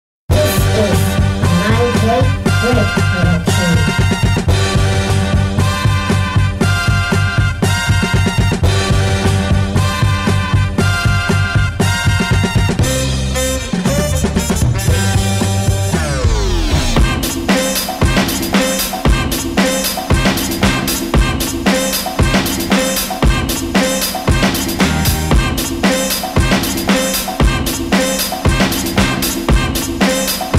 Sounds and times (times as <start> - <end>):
Electronic music: 0.3 - 30.5.